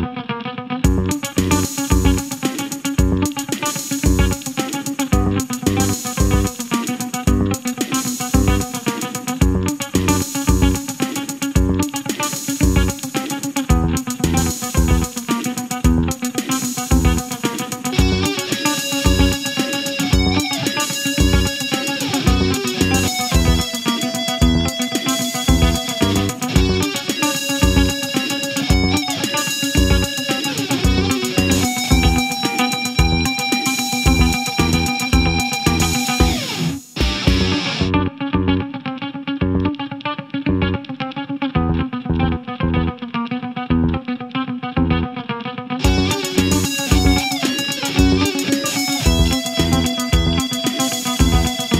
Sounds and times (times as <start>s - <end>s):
Electric guitar: 0.0s - 51.8s.